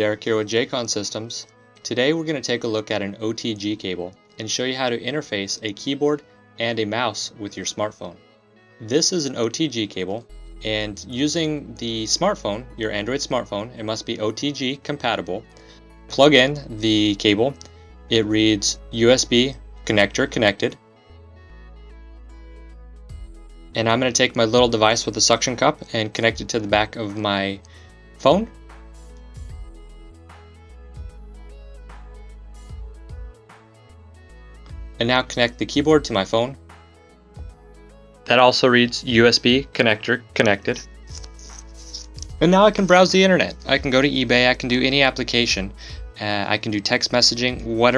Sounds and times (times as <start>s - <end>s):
Speech: 0.0s - 8.2s, 8.8s - 15.5s, 16.1s - 20.8s, 23.8s - 27.6s, 28.2s - 28.5s, 35.0s - 36.6s, 38.3s - 40.9s, 42.0s - 47.9s
Music: 0.0s - 47.9s.